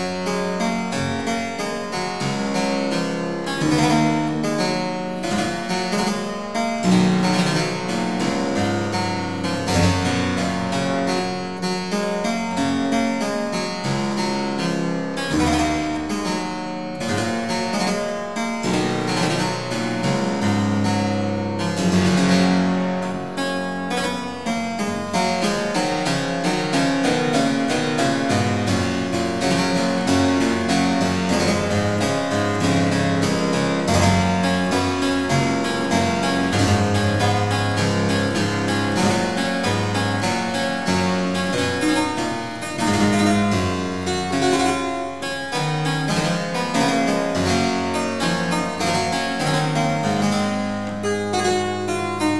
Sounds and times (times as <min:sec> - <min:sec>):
Harpsichord: 0:00.0 - 0:52.4.